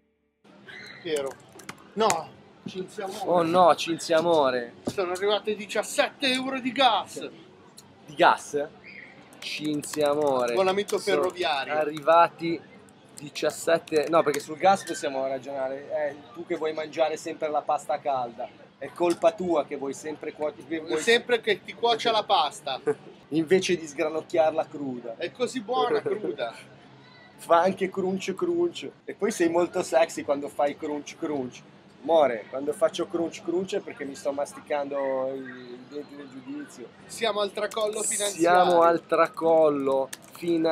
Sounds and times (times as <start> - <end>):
Speech: 9.4 - 12.6, 27.5 - 40.7.